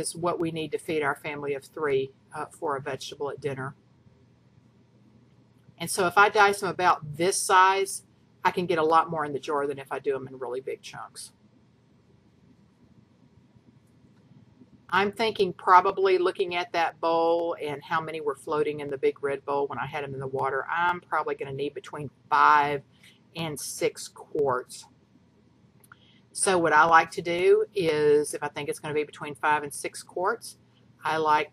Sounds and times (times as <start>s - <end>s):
Speech: 0.0s - 3.8s, 5.8s - 11.3s, 14.9s - 22.8s, 23.4s - 24.9s, 26.4s - 31.5s.